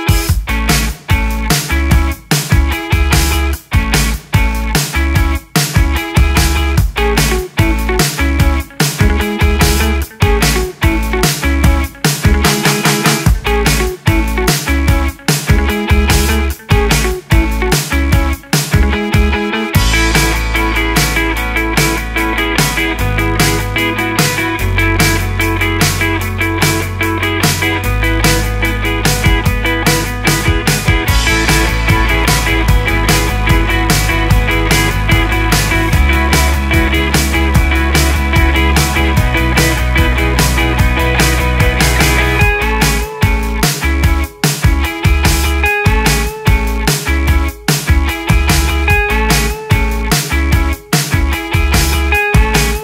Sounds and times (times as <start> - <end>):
Music: 0.0 - 52.8.